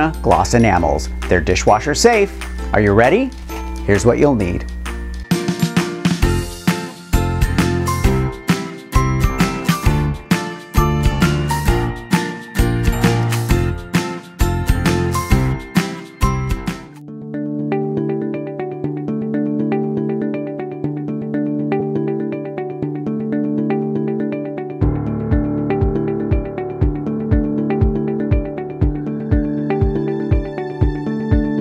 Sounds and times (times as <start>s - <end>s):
Music: 0.0s - 31.6s.